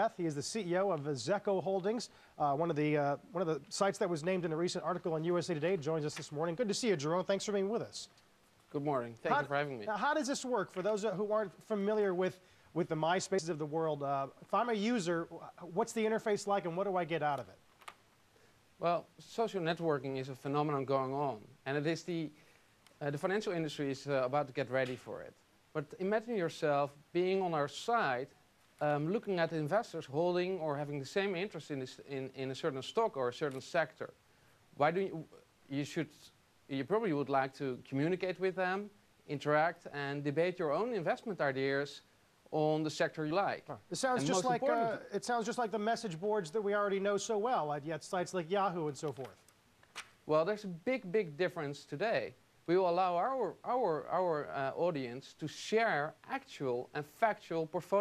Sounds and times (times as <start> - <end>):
Speech: 0.0 - 8.1, 8.7 - 17.6, 18.8 - 22.4, 23.0 - 34.2, 34.8 - 49.4, 50.3 - 58.0.